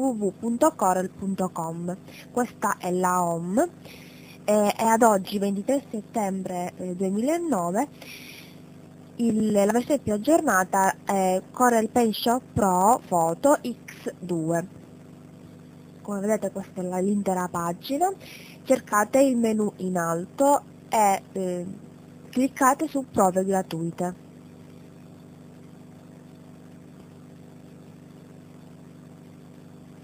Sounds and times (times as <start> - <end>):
Speech: 0.0 - 8.5, 9.2 - 14.7, 16.0 - 24.2.